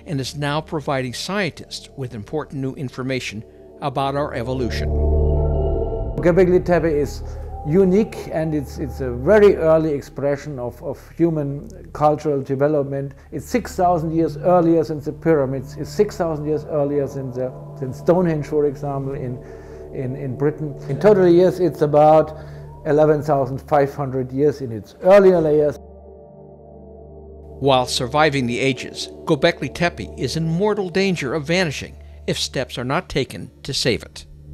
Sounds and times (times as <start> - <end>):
Speech: 0.0 - 4.9, 6.2 - 19.4, 20.0 - 25.8, 27.6 - 34.3
Music: 0.0 - 34.5.